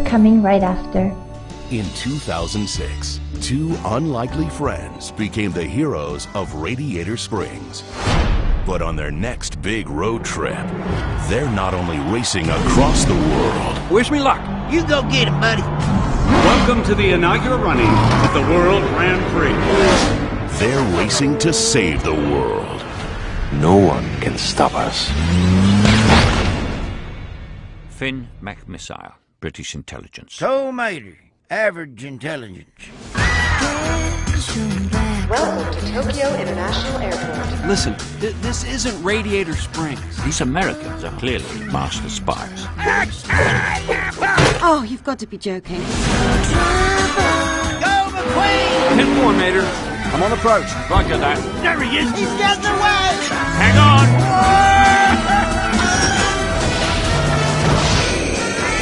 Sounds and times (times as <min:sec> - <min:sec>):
Speech: 0:00.0 - 0:07.9, 0:08.6 - 0:15.6, 0:16.4 - 0:20.0, 0:20.6 - 0:22.9, 0:23.5 - 0:25.1, 0:28.0 - 0:33.0, 0:34.4 - 0:44.0, 0:44.6 - 0:45.9, 0:47.8 - 0:54.1
Music: 0:00.0 - 0:28.6, 0:33.0 - 0:58.8
Car: 0:10.3 - 0:22.3, 0:23.0 - 0:27.0, 0:46.2 - 0:58.8.